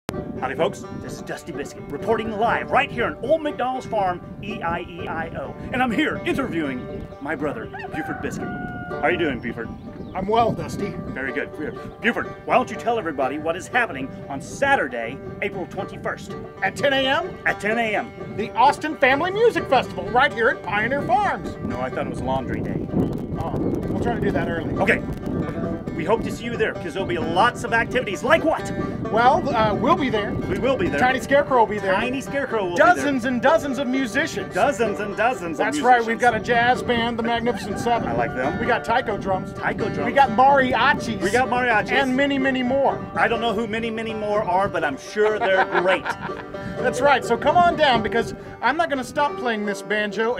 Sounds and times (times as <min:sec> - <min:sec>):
Music: 0:00.0 - 0:50.3
Speech: 0:00.4 - 0:08.4, 0:09.0 - 0:22.7, 0:23.4 - 0:25.0, 0:26.0 - 0:46.0, 0:46.8 - 0:50.3.